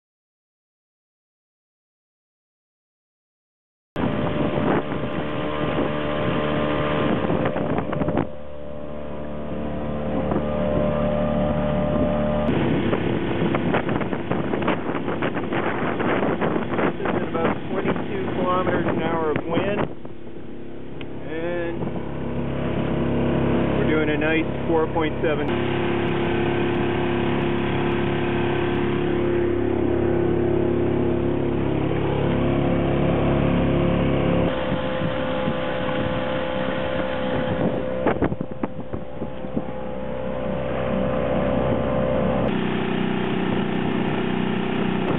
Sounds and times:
Vehicle: 4.0s - 45.1s.

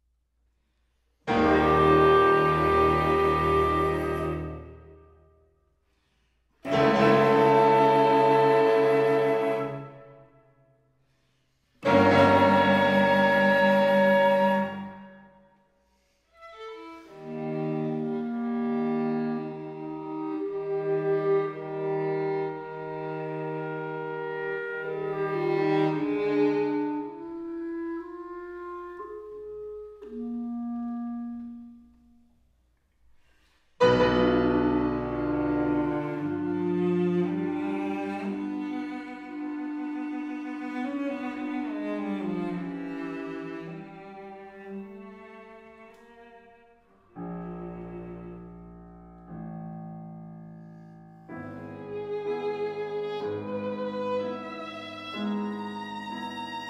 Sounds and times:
Cello: 1.1s - 5.2s, 6.6s - 10.4s, 11.6s - 15.3s, 15.9s - 32.3s, 33.8s - 56.6s
Violin, fiddle: 16.4s - 27.6s, 51.5s - 56.6s.

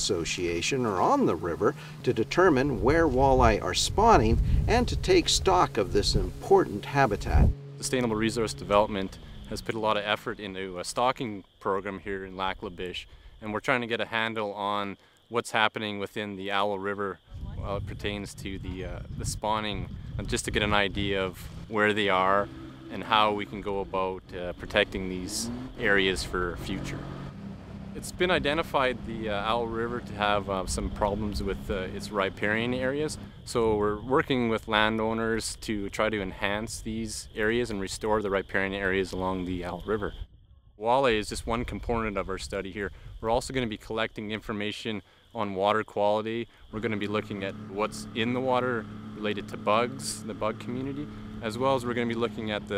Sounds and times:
Speech: 0.0s - 27.0s, 28.0s - 40.2s, 40.8s - 52.7s.

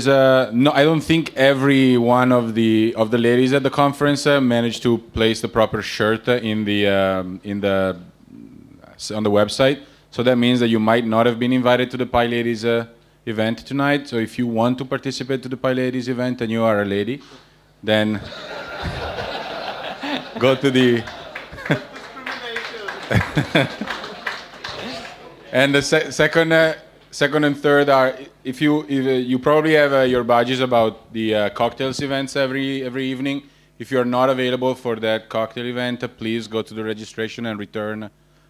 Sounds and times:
Speech: 0.0s - 17.2s, 17.8s - 18.3s, 20.4s - 21.2s, 24.7s - 38.2s.

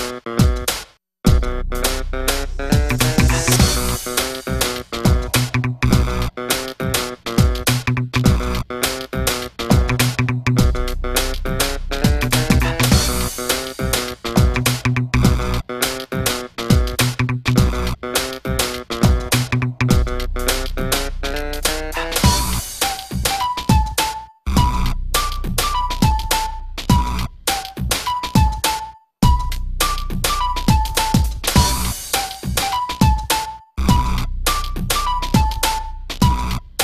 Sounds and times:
Music: 0.0s - 36.8s.

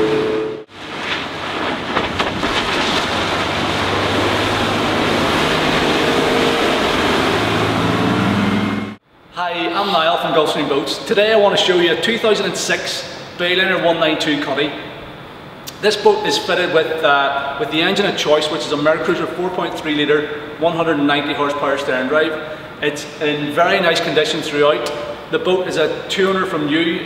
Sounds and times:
Speech: 9.4s - 14.8s, 15.7s - 27.0s.

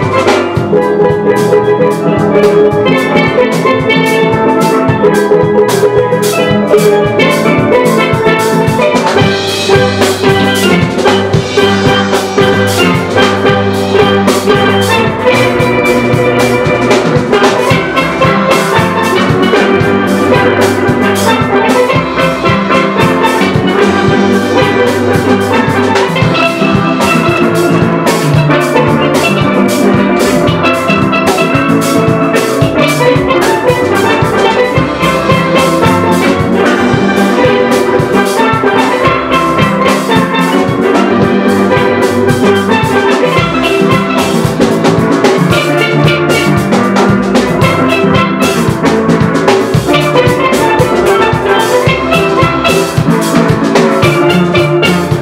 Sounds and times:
Drum: 0.0s - 55.2s
Steelpan: 0.0s - 55.2s.

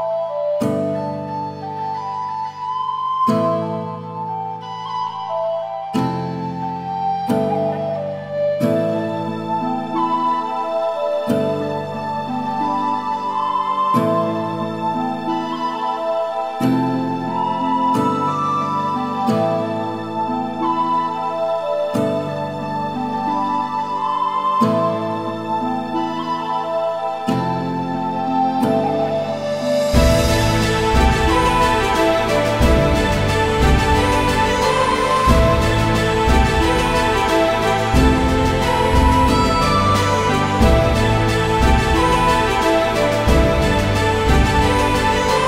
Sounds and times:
Background music: 0.0s - 45.4s
Orchestra: 0.0s - 45.4s.

